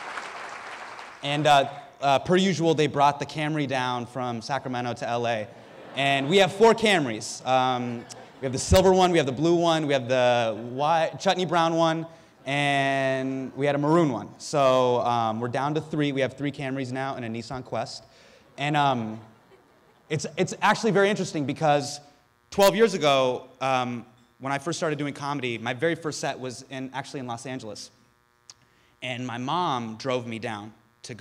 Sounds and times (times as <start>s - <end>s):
Male speech, man speaking: 1.2s - 19.3s, 20.1s - 22.0s, 22.6s - 28.0s, 29.0s - 31.2s
Narration, monologue: 1.2s - 31.2s.